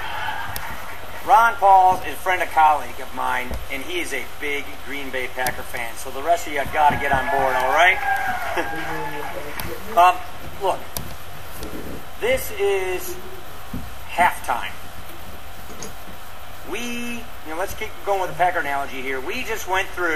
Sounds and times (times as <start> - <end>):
Narration, monologue: 1.1 - 20.1
Male speech, man speaking: 1.2 - 8.0, 8.6 - 10.9, 12.2 - 13.2, 14.1 - 14.8, 16.7 - 20.1.